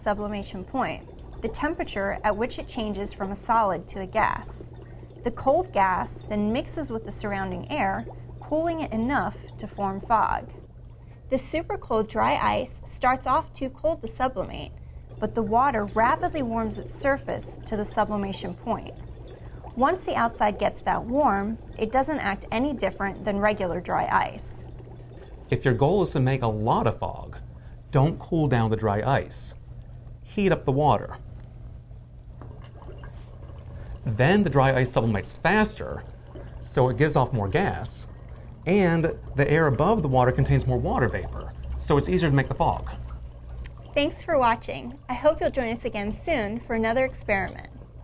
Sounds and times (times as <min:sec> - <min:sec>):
Liquid: 0:00.0 - 0:48.0
Water: 0:00.0 - 0:48.0.